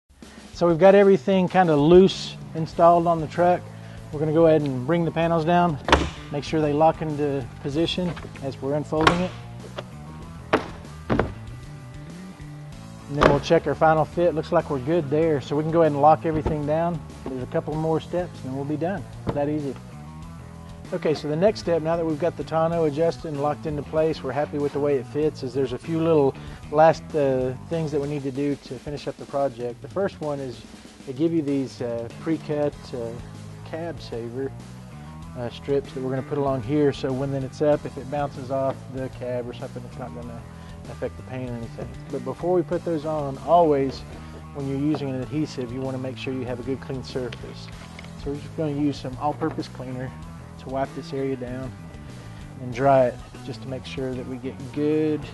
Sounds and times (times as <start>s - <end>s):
Music: 0.1s - 55.3s
Speech: 0.6s - 3.6s, 4.2s - 9.4s, 13.1s - 19.8s, 20.9s - 34.5s, 35.4s - 44.0s, 44.6s - 51.7s, 52.6s - 55.3s.